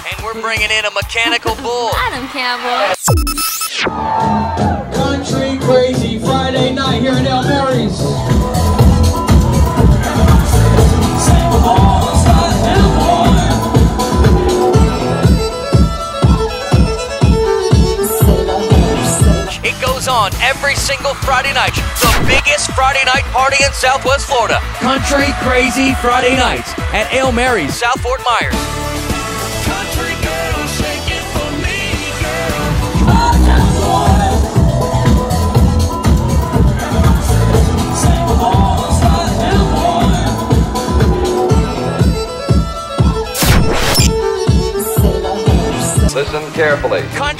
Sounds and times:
Exciting music: 0.0s - 47.3s
Happy music: 0.0s - 47.3s.

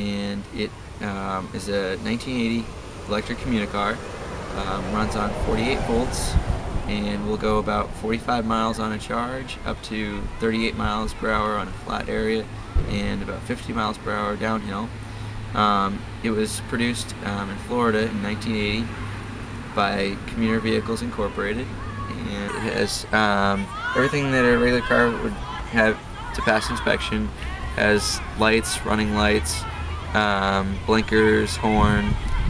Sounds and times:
Speech: 0.0s - 14.9s, 15.6s - 18.9s, 19.8s - 32.5s.

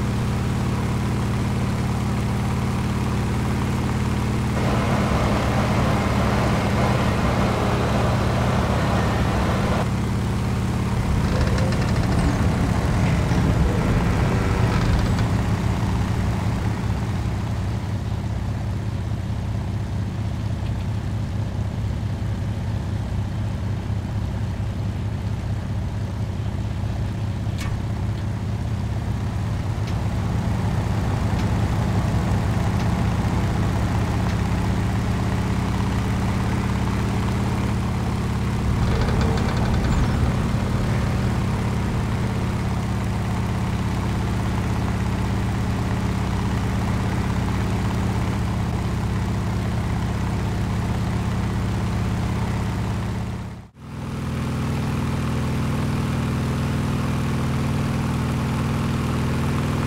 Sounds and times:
Vehicle: 0.0s - 59.8s.

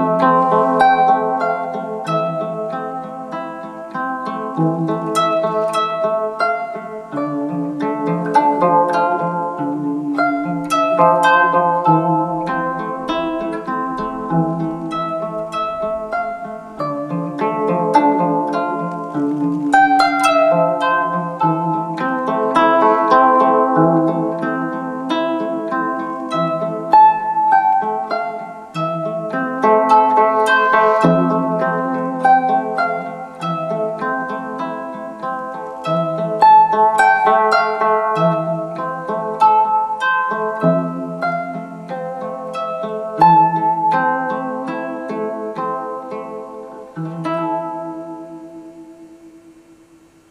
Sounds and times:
Bowed string instrument: 0.0s - 50.3s
Harp: 0.0s - 50.3s
Zither: 0.0s - 50.3s.

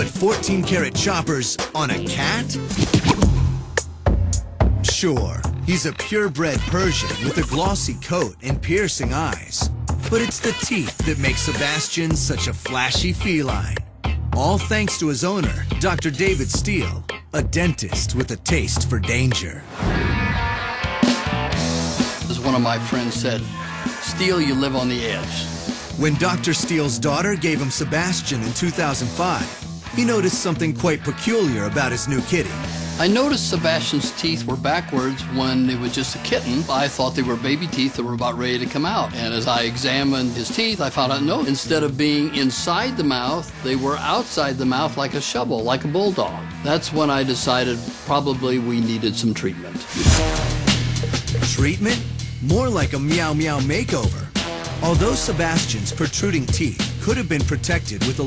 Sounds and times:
Speech: 0.0s - 2.7s, 4.8s - 13.8s, 14.4s - 19.7s, 22.3s - 50.0s, 51.4s - 58.2s
Music: 0.0s - 58.2s.

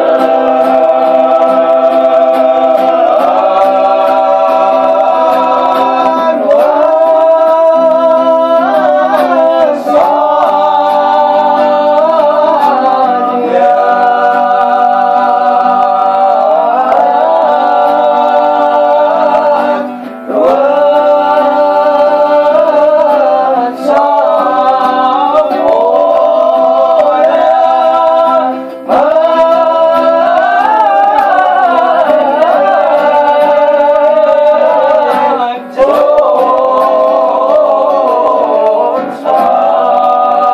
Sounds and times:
Inside, small room: 0.0s - 40.5s
Music: 0.0s - 40.5s.

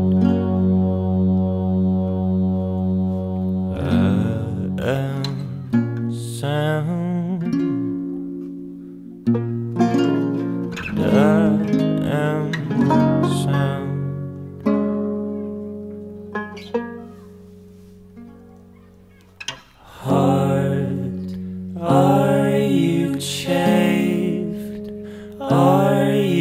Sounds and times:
Music: 0.0s - 26.4s.

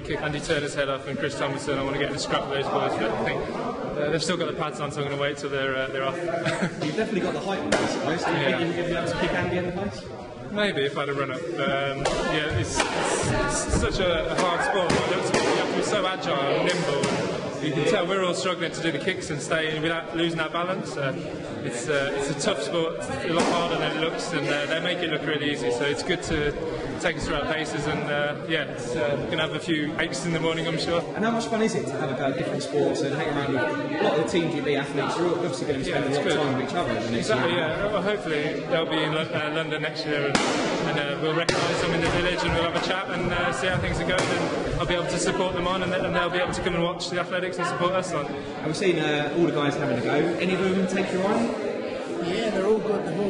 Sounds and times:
Speech: 0.0s - 53.2s.

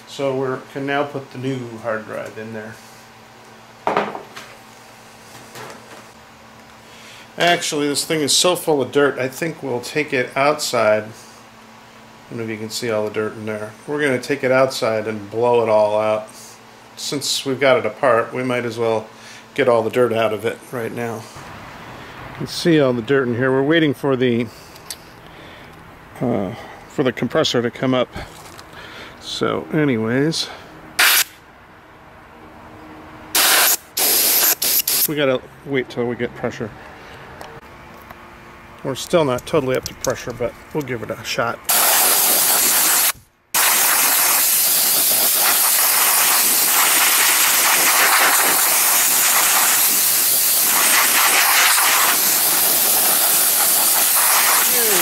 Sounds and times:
Hiss: 31.0s - 31.4s, 33.4s - 35.1s, 41.7s - 55.0s.

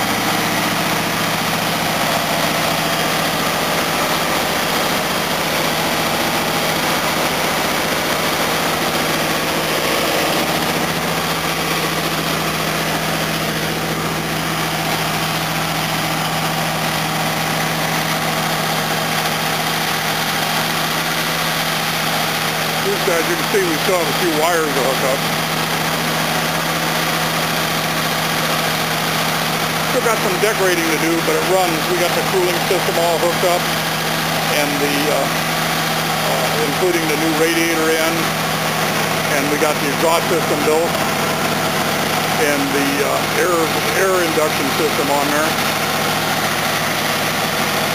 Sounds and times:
Engine: 0.0s - 47.9s.

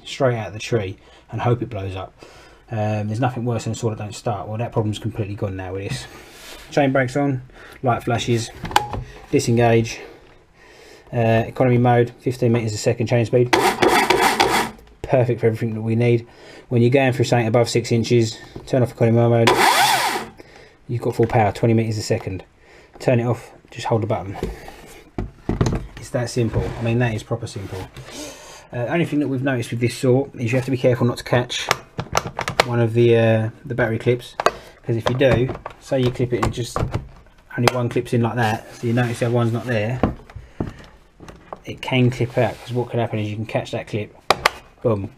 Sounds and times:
Speech: 0.0s - 2.1s, 2.7s - 6.1s, 6.7s - 8.6s, 9.3s - 10.1s, 11.1s - 13.6s, 15.0s - 19.5s, 20.9s - 24.5s, 26.0s - 28.0s, 28.7s - 31.8s, 32.6s - 40.2s, 41.6s - 44.1s, 44.8s - 45.1s
Chainsaw: 13.6s - 14.8s, 19.5s - 20.4s.

